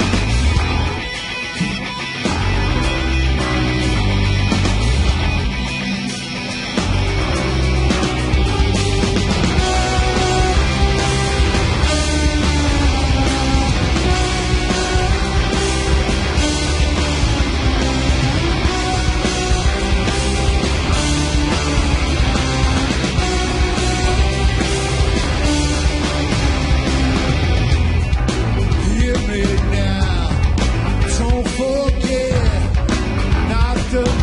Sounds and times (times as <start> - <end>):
Music: 0.0 - 34.2.